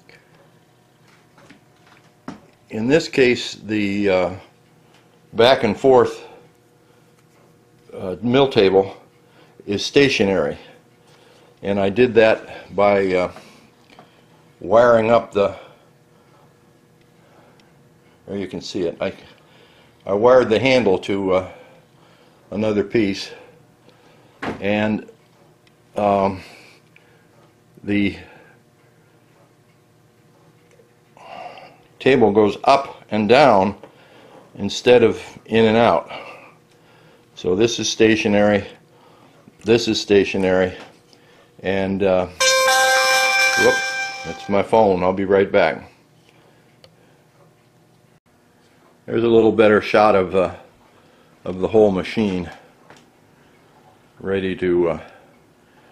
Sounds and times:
Speech: 2.7s - 4.5s, 5.4s - 6.4s, 7.9s - 10.8s, 11.6s - 13.4s, 14.6s - 15.7s, 18.3s - 19.4s, 20.0s - 21.6s, 22.5s - 23.5s, 24.6s - 25.2s, 26.0s - 26.6s, 27.8s - 28.4s, 32.0s - 33.8s, 34.6s - 36.4s, 37.4s - 38.8s, 39.6s - 40.9s, 41.6s - 42.4s, 43.6s - 46.0s, 49.1s - 50.7s, 51.4s - 52.7s, 54.2s - 55.2s.

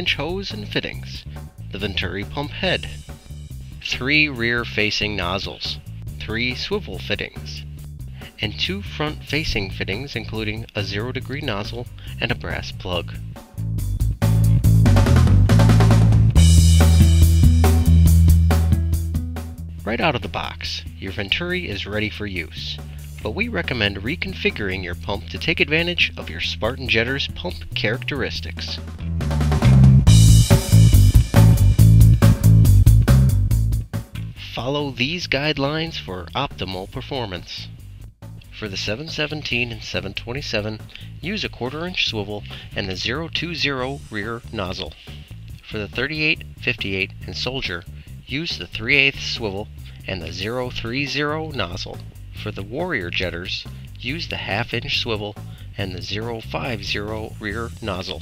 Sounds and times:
Speech: 0.0s - 3.0s, 3.8s - 13.2s, 19.8s - 28.8s, 34.2s - 37.8s, 38.5s - 58.2s
Music: 0.0s - 58.2s.

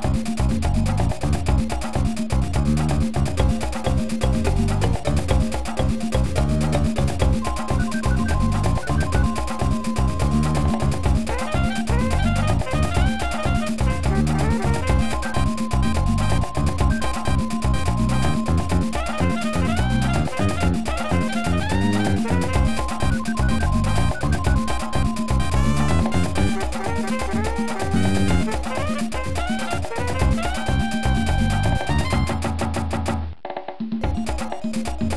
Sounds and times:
Music: 0.0s - 35.1s.

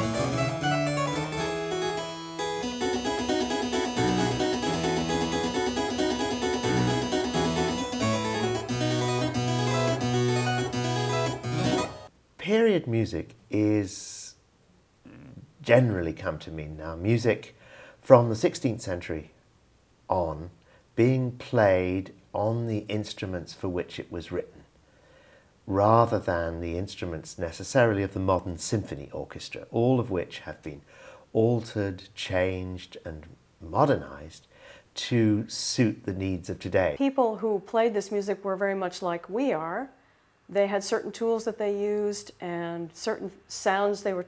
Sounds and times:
Speech: 12.4s - 14.4s, 15.1s - 19.3s, 20.1s - 24.7s, 25.7s - 44.2s.

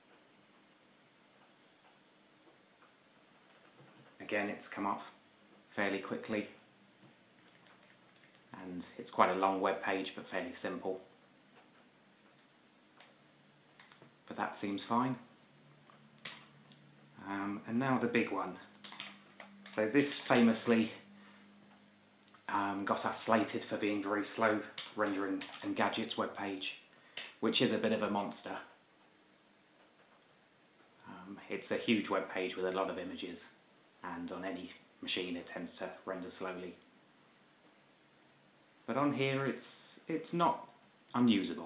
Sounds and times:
Inside, small room: 0.0s - 41.6s
Speech: 4.2s - 6.6s, 8.5s - 11.1s, 14.3s - 15.3s, 17.2s - 18.7s, 19.7s - 21.1s, 22.5s - 28.8s, 31.0s - 36.8s, 38.9s - 41.6s.

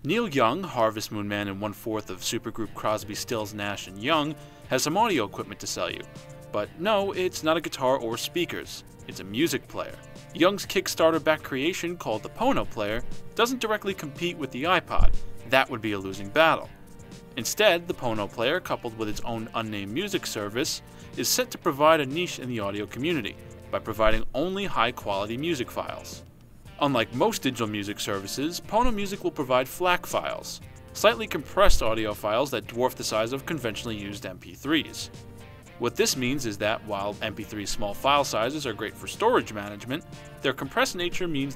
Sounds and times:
Speech: 0.0s - 16.7s, 17.4s - 26.2s, 26.8s - 35.1s, 35.8s - 41.5s
Music: 0.0s - 41.5s.

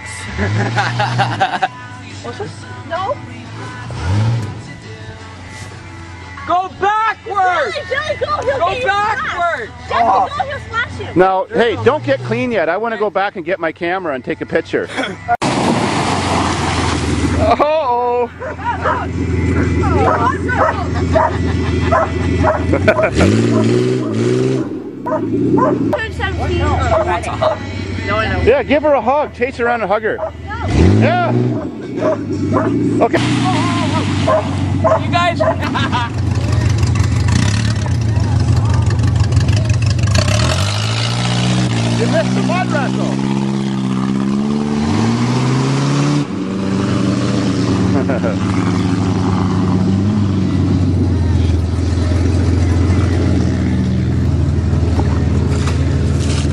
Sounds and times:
Vehicle: 0.0s - 56.5s
Bark: 18.4s - 19.1s, 20.0s - 23.8s, 25.1s - 25.8s, 26.9s - 27.6s, 31.6s - 32.8s, 34.3s - 35.7s.

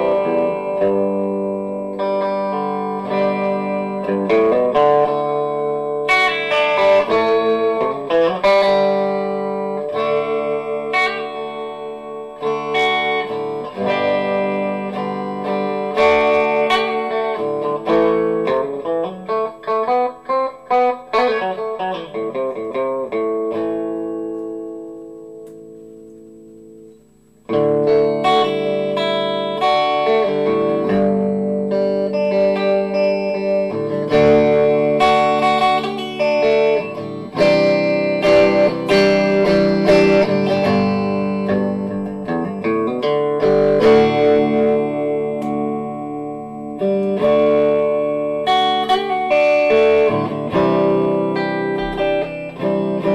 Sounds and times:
Electric guitar: 0.0s - 53.1s.

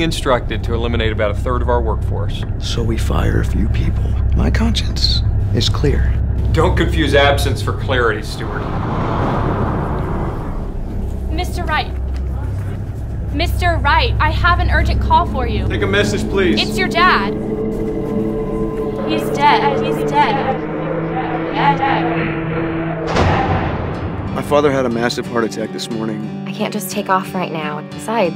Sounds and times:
Speech: 0.0s - 8.6s, 24.4s - 28.3s.

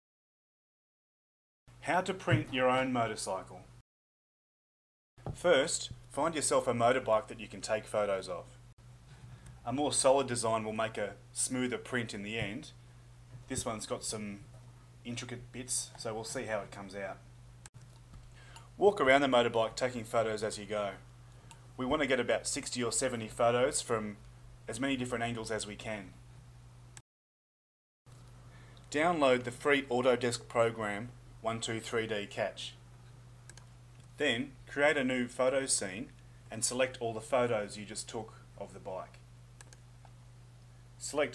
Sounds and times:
Speech: 1.8s - 3.7s, 5.4s - 8.6s, 9.6s - 12.8s, 13.5s - 17.2s, 18.8s - 21.0s, 21.8s - 26.2s, 28.9s - 32.8s, 34.2s - 39.2s, 41.0s - 41.3s.

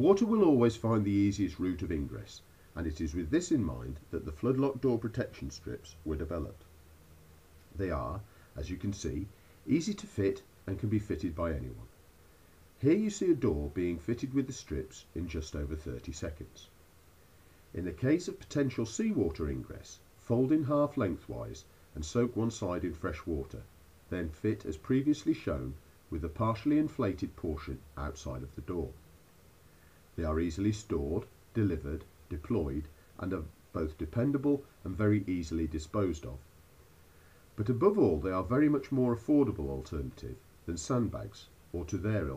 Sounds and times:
Speech: 0.0s - 6.7s, 7.7s - 11.9s, 12.8s - 16.8s, 17.7s - 29.0s, 30.2s - 36.5s, 37.6s - 42.3s.

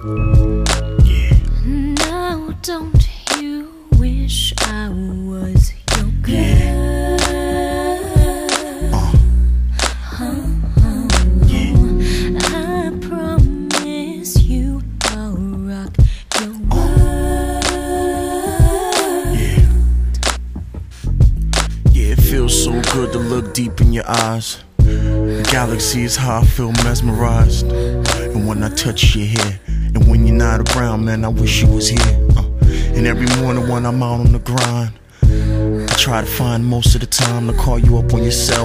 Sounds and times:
Music: 0.0s - 38.6s.

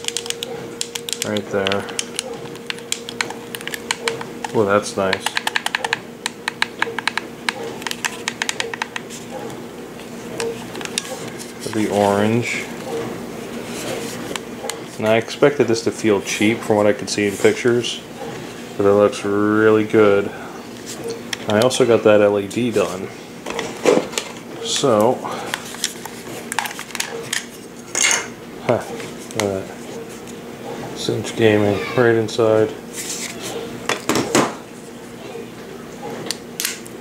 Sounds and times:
Speech: 18.8s - 20.4s, 21.5s - 23.1s, 31.0s - 32.8s.

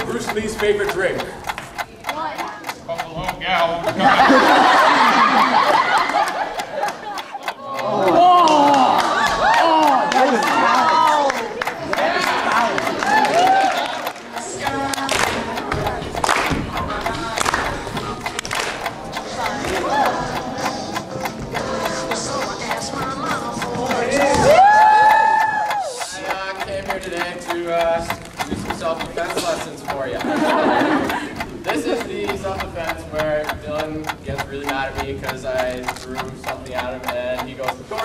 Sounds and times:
Tick: 0.0s - 4.9s, 5.9s - 8.8s, 19.2s - 38.0s
Tick-tock: 0.0s - 38.0s
Music: 13.1s - 25.6s.

